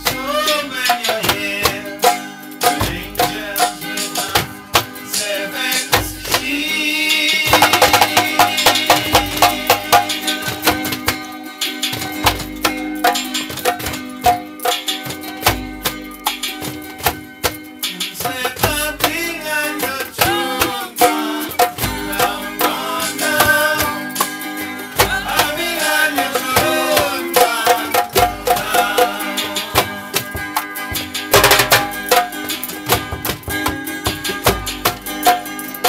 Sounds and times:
Music: 0:00.0 - 0:35.8.

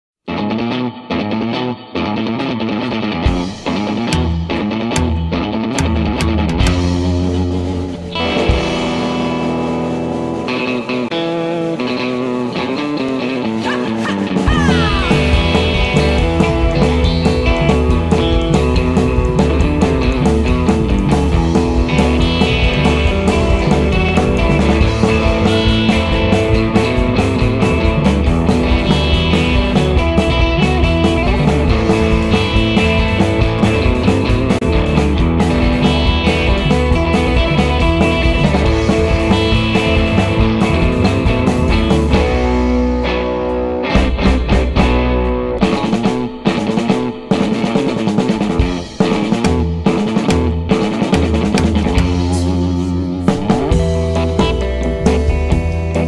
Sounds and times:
Music: 0:00.2 - 0:56.0.

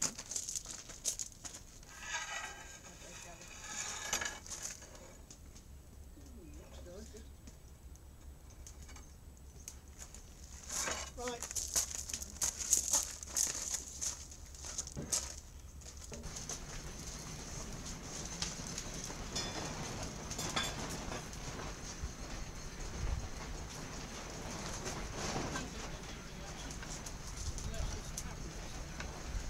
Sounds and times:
Speech: 0:06.2 - 0:07.3, 0:11.1 - 0:11.5, 0:25.6 - 0:26.8, 0:27.6 - 0:29.0.

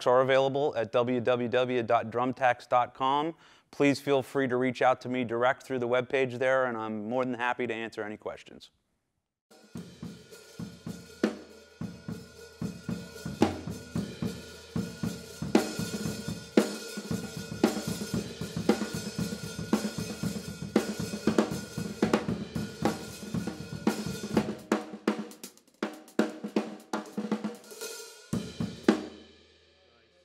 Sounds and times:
Drum: 0:09.5 - 0:29.6
Drum kit: 0:09.5 - 0:30.2.

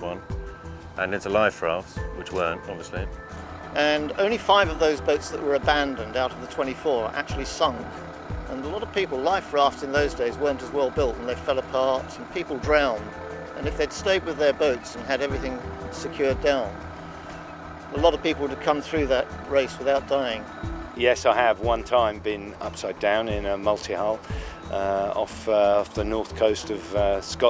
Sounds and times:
Music: 0:00.0 - 0:27.5
Speech: 0:01.0 - 0:03.1, 0:03.8 - 0:07.9, 0:08.5 - 0:16.7, 0:18.0 - 0:20.4, 0:21.0 - 0:27.5.

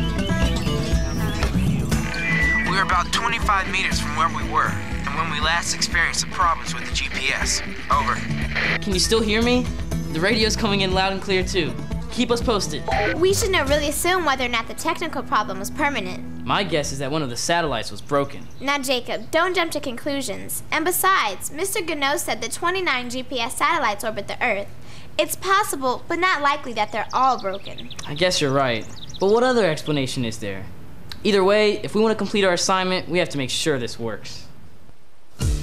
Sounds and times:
Music: 0:00.0 - 0:17.3, 0:35.4 - 0:35.6
Speech: 0:02.7 - 0:08.2, 0:08.8 - 0:09.6, 0:10.2 - 0:34.5.

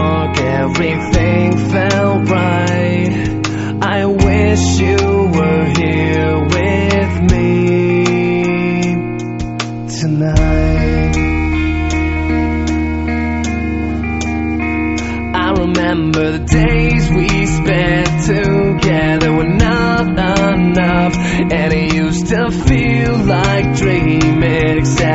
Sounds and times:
Music: 0:00.0 - 0:25.1.

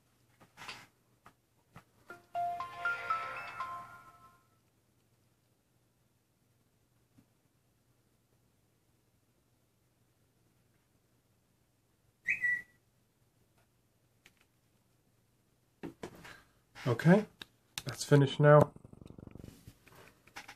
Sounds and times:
Whistling: 0:12.2 - 0:12.8.

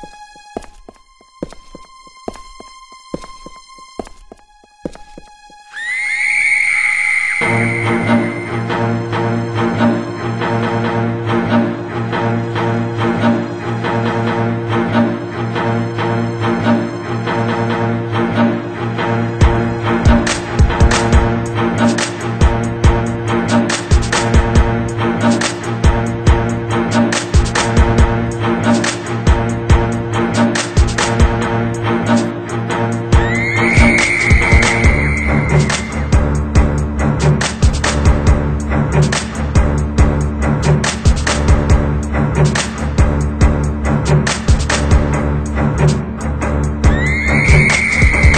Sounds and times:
Music: 0:00.0 - 0:48.3.

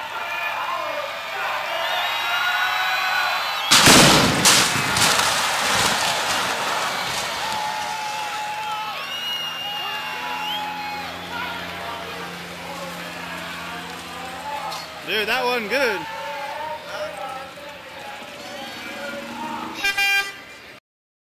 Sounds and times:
Vehicle: 0:00.0 - 0:20.8
Speech: 0:11.3 - 0:19.7.

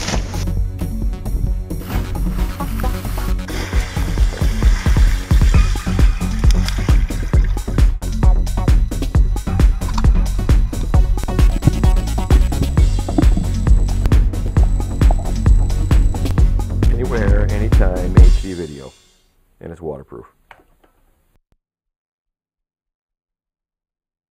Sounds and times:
Music: 0:00.0 - 0:19.4
Speech: 0:16.9 - 0:19.0, 0:19.6 - 0:20.4.

